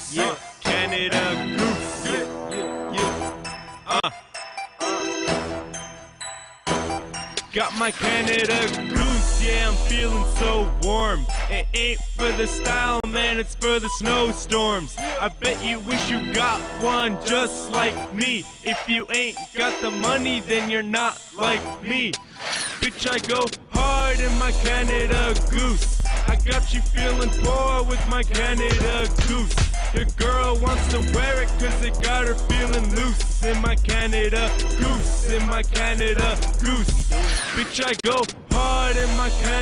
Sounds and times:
Music: 0.0s - 39.6s.

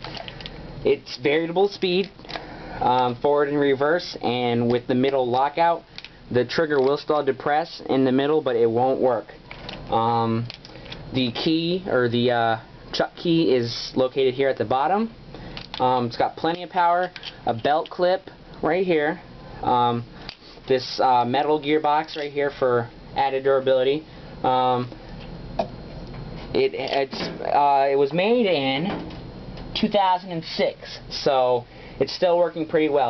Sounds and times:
Speech: 0.8s - 2.1s, 2.8s - 10.5s, 11.1s - 15.2s, 15.8s - 20.1s, 20.7s - 25.0s, 26.5s - 29.0s, 29.8s - 33.0s.

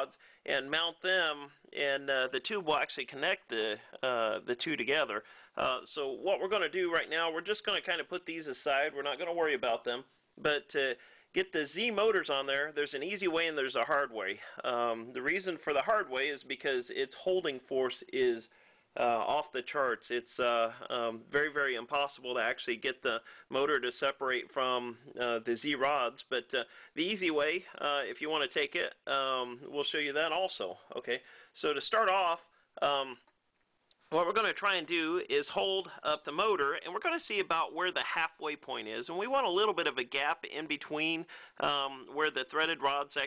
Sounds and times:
Speech: 0.0s - 33.3s, 34.1s - 43.2s.

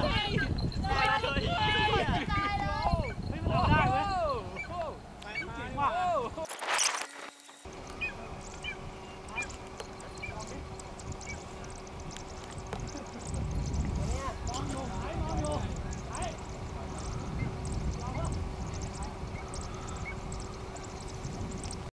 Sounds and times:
Speech: 0.0s - 6.4s, 14.1s - 17.0s, 18.0s - 19.2s.

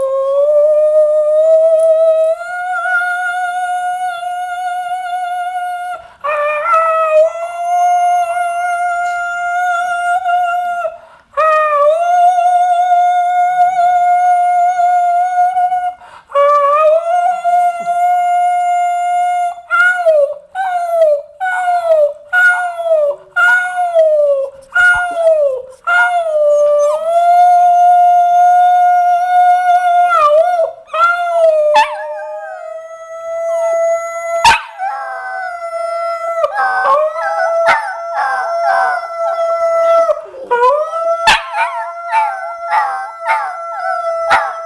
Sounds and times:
Howl: 0.0s - 44.6s.

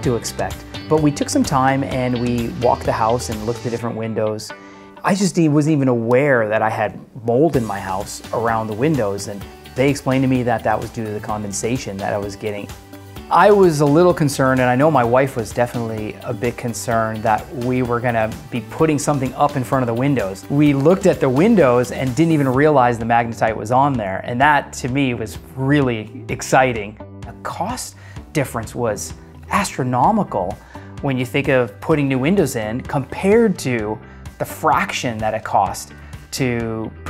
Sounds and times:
Speech: 0.0s - 12.7s, 13.3s - 37.0s
Music: 0.0s - 37.0s.

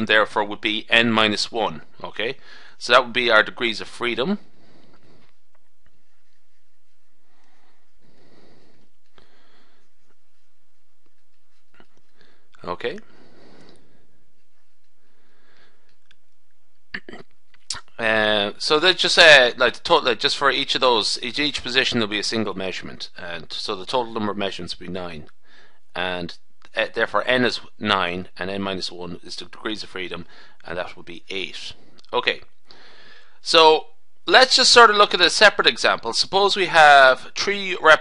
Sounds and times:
Speech: 0.0s - 4.4s, 12.6s - 13.0s, 17.0s - 25.3s, 26.0s - 32.5s, 33.4s - 38.0s.

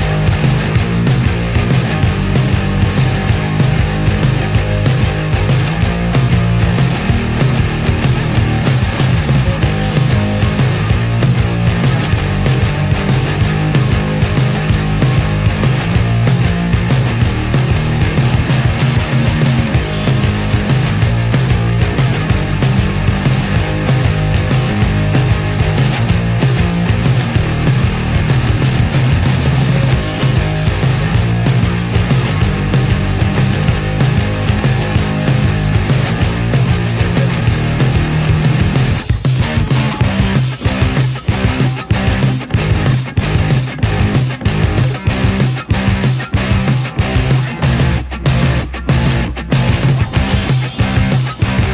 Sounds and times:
Music: 0.0s - 51.7s.

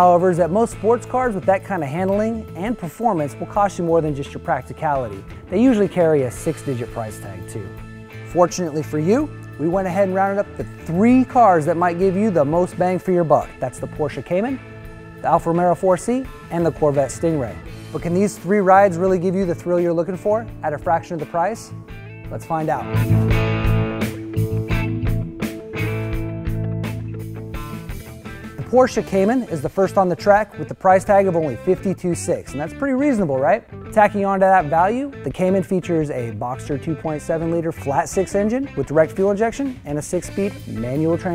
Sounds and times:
Speech: 0.0s - 7.7s, 8.3s - 14.6s, 15.2s - 21.7s, 22.3s - 23.0s, 28.6s - 41.3s
Music: 0.0s - 41.3s.

